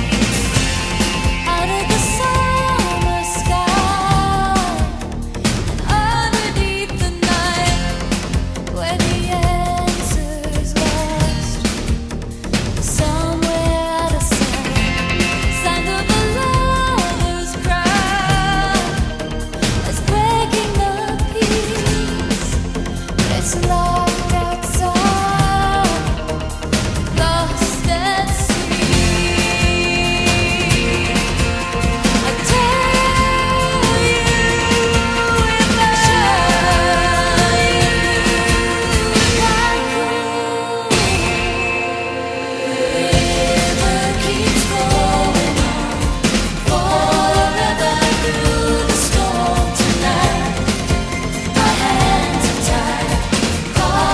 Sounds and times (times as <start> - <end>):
Music: 0.0 - 54.1.